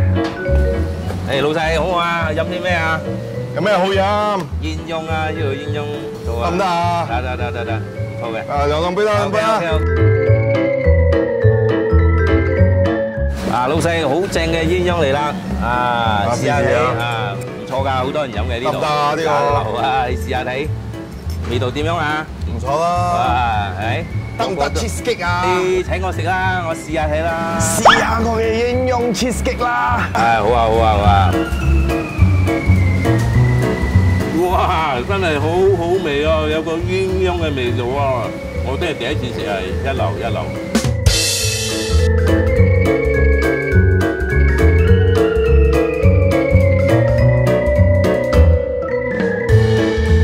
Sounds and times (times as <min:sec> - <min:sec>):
Music: 0:00.0 - 0:50.2
Speech: 0:13.5 - 0:20.7, 0:21.5 - 0:31.4, 0:34.4 - 0:40.6.